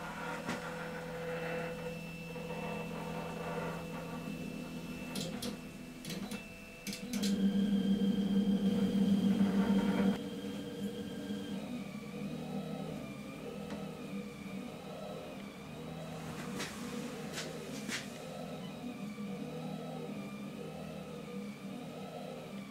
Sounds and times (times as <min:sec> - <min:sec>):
Printer: 0:00.0 - 0:22.7.